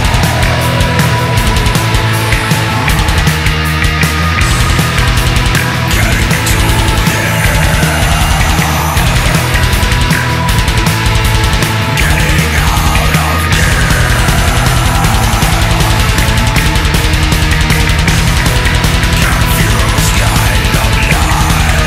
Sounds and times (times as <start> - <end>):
Electronic music: 0.0 - 21.8.